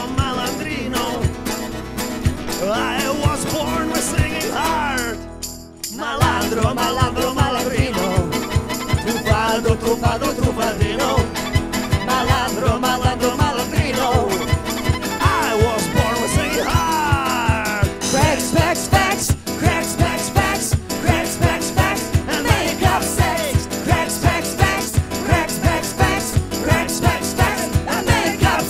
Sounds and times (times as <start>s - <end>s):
Jingle (music): 0.0s - 28.6s
Singing: 5.9s - 8.4s, 9.0s - 11.3s, 12.0s - 14.6s, 15.2s - 28.6s.